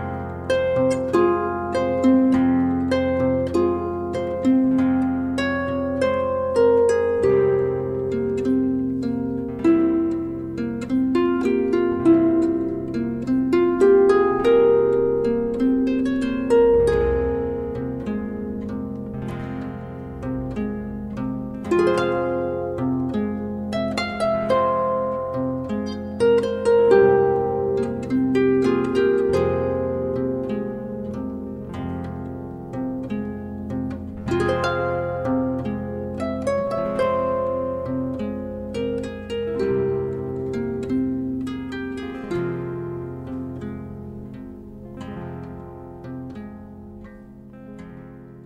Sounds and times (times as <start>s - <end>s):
Inside, small room: 0.0s - 48.4s
Music: 0.0s - 48.4s.